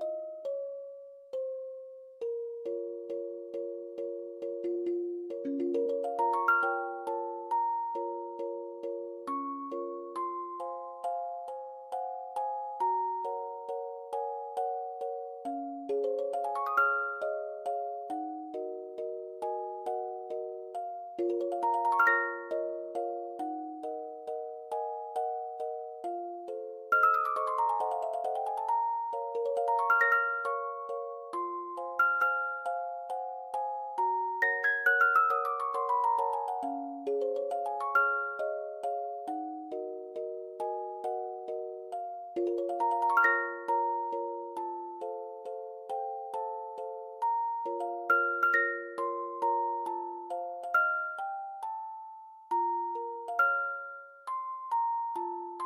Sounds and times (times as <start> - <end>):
Music: 0.0 - 55.6.